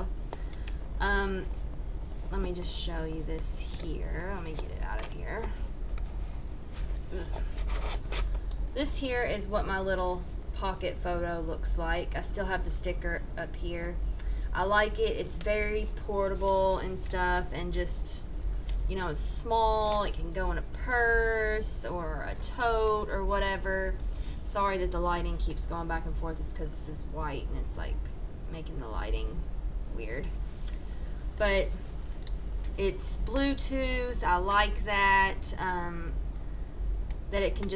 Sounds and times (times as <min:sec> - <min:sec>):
Speech: 0:01.0 - 0:01.6, 0:02.3 - 0:05.6, 0:08.8 - 0:18.2, 0:18.9 - 0:30.4, 0:31.4 - 0:31.8, 0:32.7 - 0:36.2, 0:37.3 - 0:37.7.